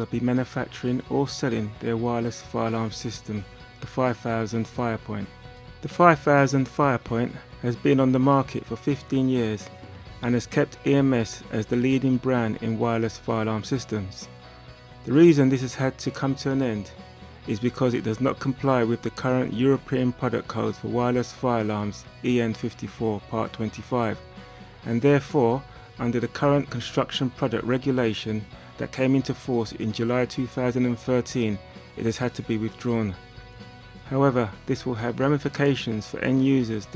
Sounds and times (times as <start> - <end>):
Speech: 0.0 - 14.3, 15.1 - 24.2, 24.8 - 33.2, 34.0 - 36.9
Music: 0.0 - 36.9.